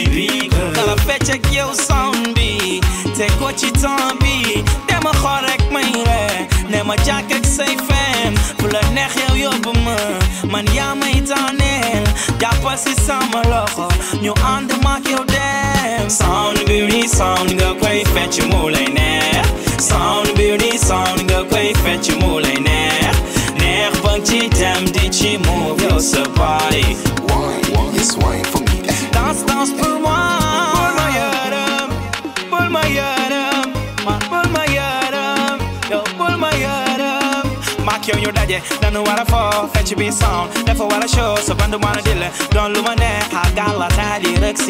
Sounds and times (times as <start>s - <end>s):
Afrobeat: 0.0s - 44.7s.